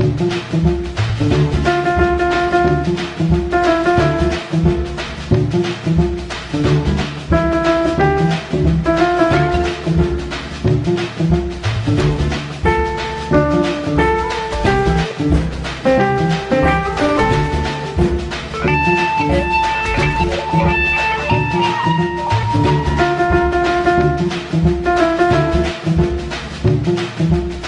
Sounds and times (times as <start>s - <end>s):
Music: 0.0s - 27.6s.